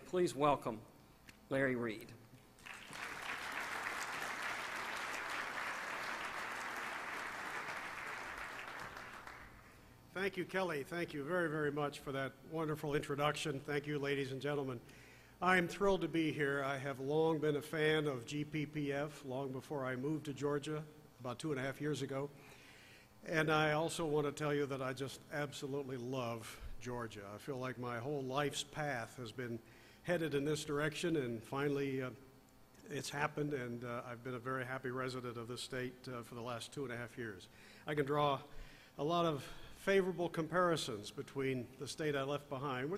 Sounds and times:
Speech: 0.0 - 0.9, 1.5 - 2.2, 10.1 - 14.8, 15.4 - 22.3, 23.3 - 32.2, 32.8 - 42.9.

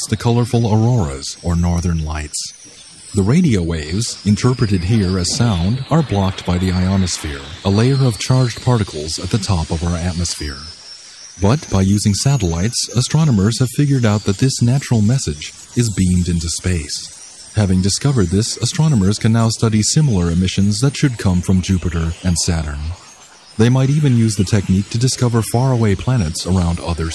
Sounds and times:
Speech: 0.0 - 2.6, 3.2 - 10.8, 11.4 - 23.0, 23.6 - 27.1.

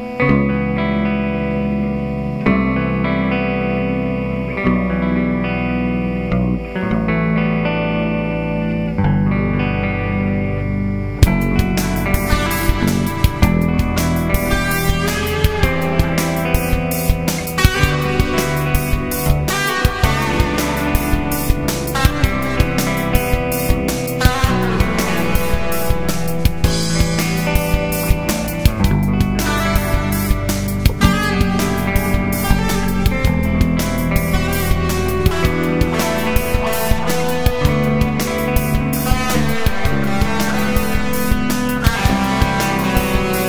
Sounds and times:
Bass guitar: 0.0 - 43.4
Electric guitar: 0.0 - 43.4
Strum: 0.0 - 43.4
Tender music: 10.8 - 43.4
Funk: 11.0 - 43.4
Pop music: 11.2 - 43.4
Trance music: 11.2 - 43.4.

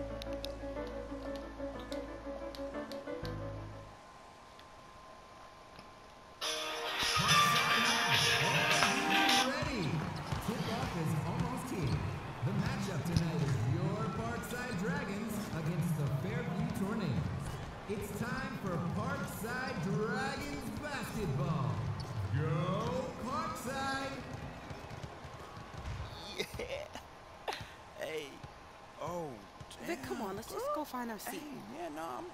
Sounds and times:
Basketball bounce: 9.6 - 13.7, 24.2 - 26.1.

